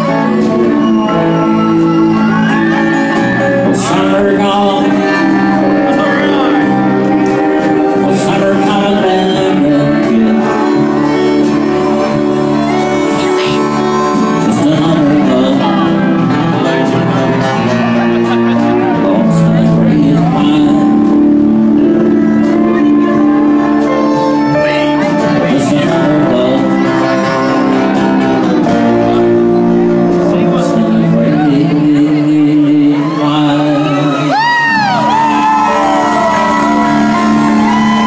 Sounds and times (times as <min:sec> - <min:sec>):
Inside, public space: 0:00.0 - 0:38.0
Music: 0:00.0 - 0:38.0
Singing: 0:00.0 - 0:38.0
Shout: 0:01.0 - 0:03.8, 0:33.0 - 0:38.0.